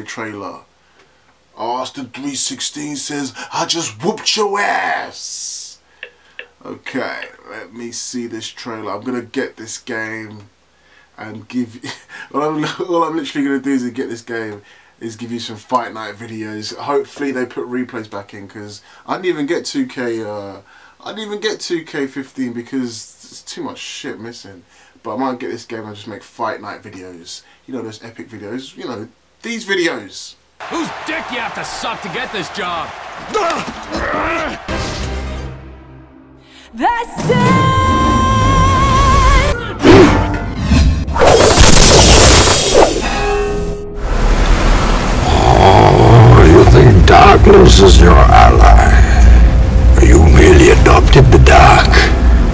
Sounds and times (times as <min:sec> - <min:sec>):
Speech: 0:00.0 - 0:00.7, 0:01.6 - 0:05.8, 0:06.6 - 0:10.5, 0:11.2 - 0:33.6, 0:45.3 - 0:49.4, 0:50.0 - 0:52.1
Music: 0:34.6 - 0:41.2, 0:48.8 - 0:52.5
Shatter: 0:41.2 - 0:43.3.